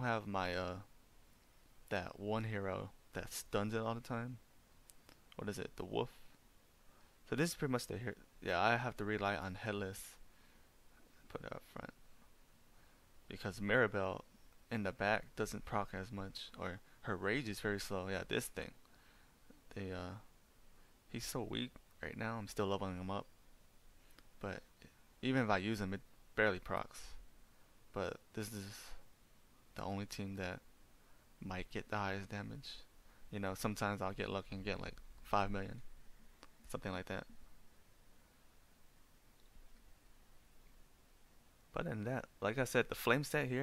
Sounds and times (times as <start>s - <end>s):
Speech: 0.0s - 0.9s, 1.9s - 4.4s, 5.4s - 6.3s, 7.3s - 10.2s, 11.3s - 12.0s, 13.3s - 18.8s, 19.7s - 20.3s, 21.1s - 23.3s, 24.4s - 27.2s, 27.9s - 29.0s, 29.8s - 30.6s, 31.4s - 35.9s, 36.6s - 37.4s, 41.7s - 43.6s.